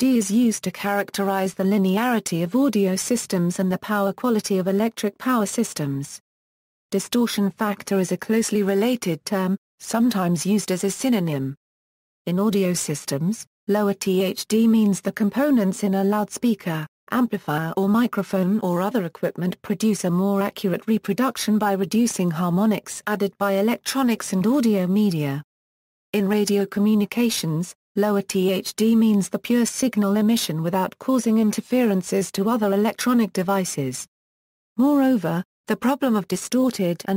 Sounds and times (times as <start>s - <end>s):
Speech: 0.0s - 6.2s, 7.0s - 11.6s, 12.3s - 25.5s, 26.2s - 34.1s, 34.8s - 37.1s.